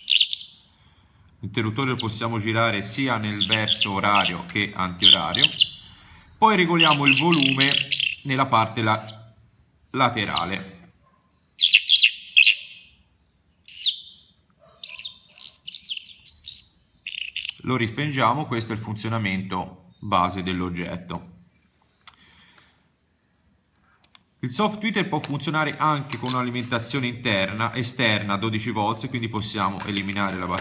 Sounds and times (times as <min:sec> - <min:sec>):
Chirp, tweet: 0:00.0 - 0:00.7, 0:01.8 - 0:02.2, 0:03.3 - 0:06.0, 0:06.8 - 0:08.3, 0:08.9 - 0:09.3, 0:10.2 - 0:10.6, 0:11.3 - 0:17.6
Speech: 0:01.4 - 0:05.6, 0:06.4 - 0:09.3, 0:09.9 - 0:10.9, 0:17.6 - 0:21.4, 0:24.4 - 0:30.6.